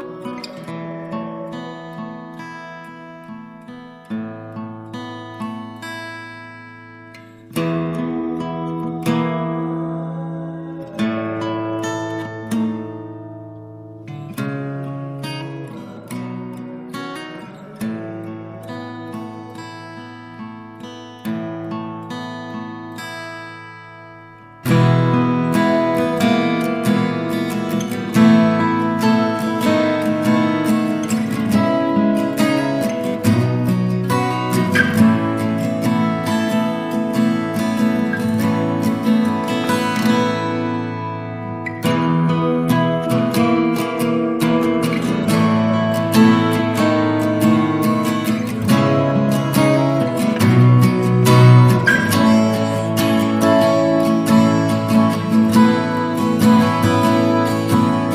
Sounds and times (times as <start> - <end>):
Music: 0.0 - 58.1.